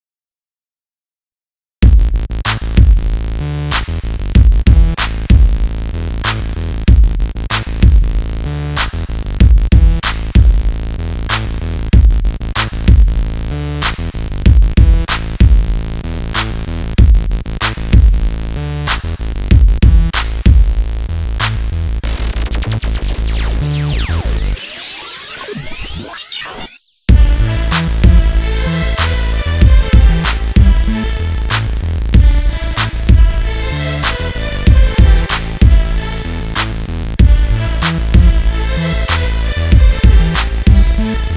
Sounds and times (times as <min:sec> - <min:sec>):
Pop music: 0:21.4 - 0:41.3.